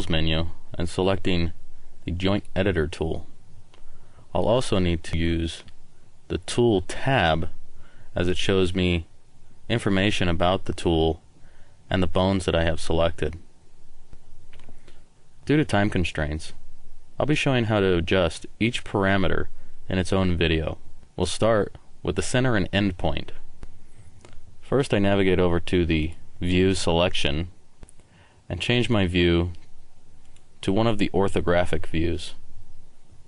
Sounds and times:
Speech: 0.0 - 3.3, 4.3 - 7.6, 8.2 - 9.1, 9.7 - 11.2, 11.9 - 13.5, 15.4 - 16.6, 17.2 - 23.4, 24.6 - 27.6, 28.5 - 29.7, 30.6 - 32.4.

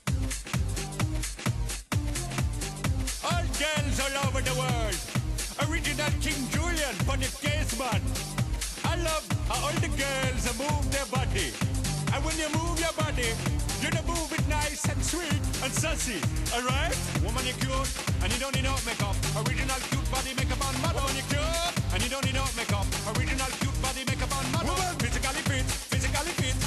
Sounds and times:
Music: 0.0 - 26.6
Speech: 3.2 - 8.0, 8.8 - 26.6.

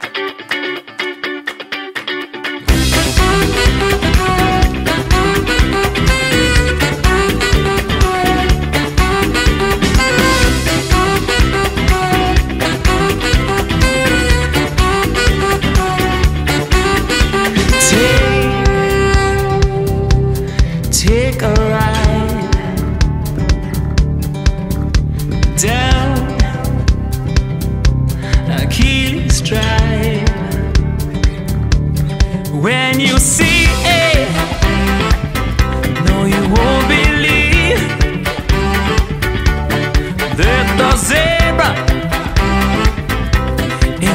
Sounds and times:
Rhythm and blues: 0.0 - 44.1.

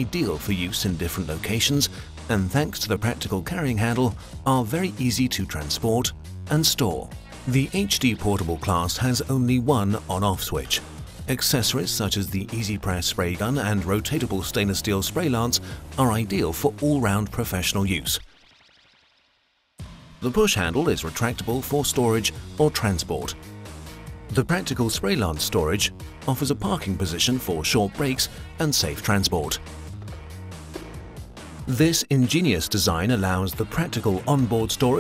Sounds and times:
Speech: 0.0 - 18.2, 20.2 - 23.4, 24.3 - 29.6, 31.7 - 35.0
Music: 0.0 - 35.0.

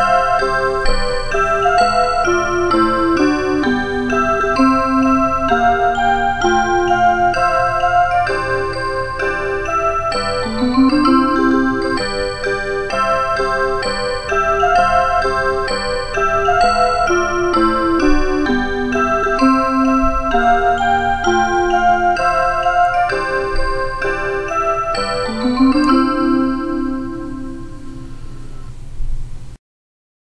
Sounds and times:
Music: 0.0 - 29.6.

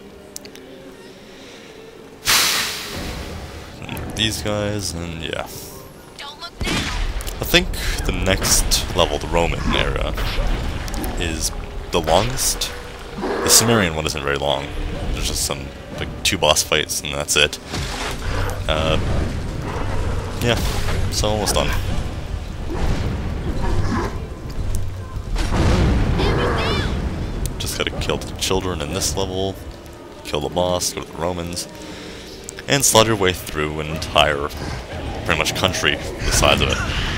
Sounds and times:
Speech: 7.4 - 10.3, 11.2 - 12.8, 13.4 - 17.6, 18.7 - 19.0, 20.4 - 21.9, 35.2 - 37.0.

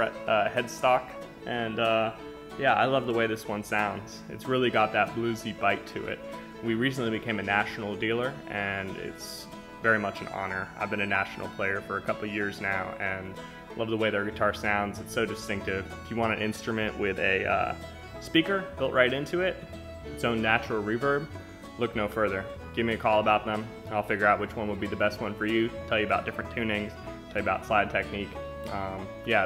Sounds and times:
Speech: 0.0 - 19.6, 20.2 - 29.4
Guitar: 0.0 - 29.4.

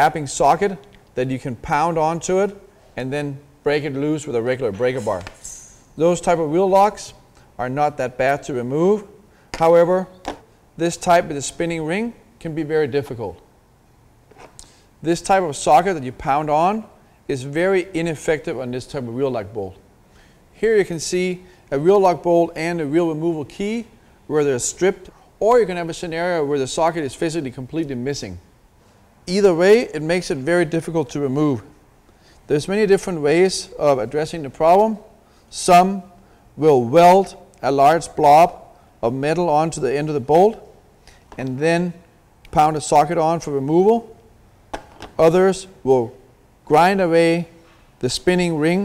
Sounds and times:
Speech: 0.0 - 5.4, 6.0 - 10.2, 10.8 - 13.4, 15.0 - 19.8, 20.6 - 28.4, 29.3 - 31.7, 32.5 - 40.7, 41.4 - 44.2, 45.2 - 48.8.

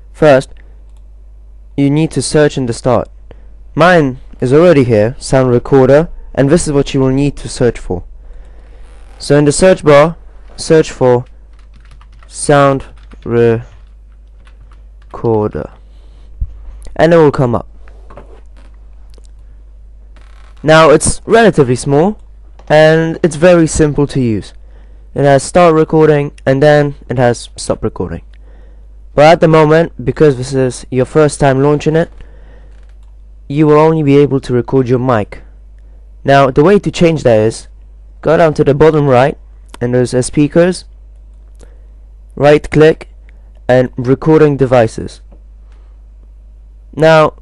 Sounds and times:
Speech: 0.2 - 0.6, 1.8 - 3.1, 3.8 - 8.1, 9.2 - 11.3, 12.3 - 13.8, 15.1 - 15.8, 16.9 - 17.7, 20.6 - 24.6, 25.2 - 28.3, 29.2 - 32.2, 33.5 - 35.5, 36.2 - 40.9, 42.4 - 45.3, 47.0 - 47.4.

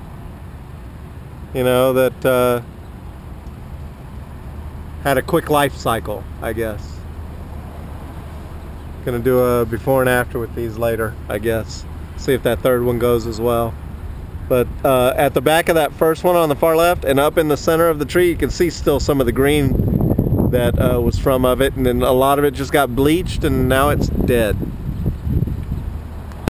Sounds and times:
Speech: 1.6 - 2.6, 5.0 - 7.0, 9.0 - 13.8, 14.5 - 19.8, 20.5 - 24.6.

